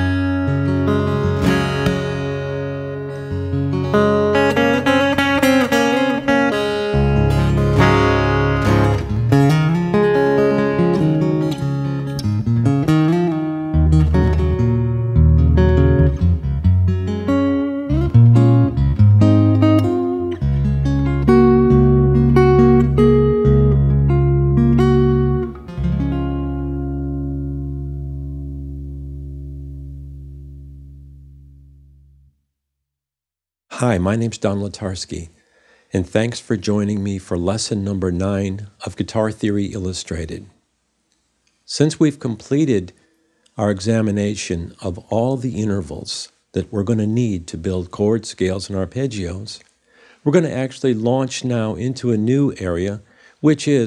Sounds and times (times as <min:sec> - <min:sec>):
Acoustic guitar: 0:00.0 - 0:32.1
Strum: 0:00.0 - 0:32.3.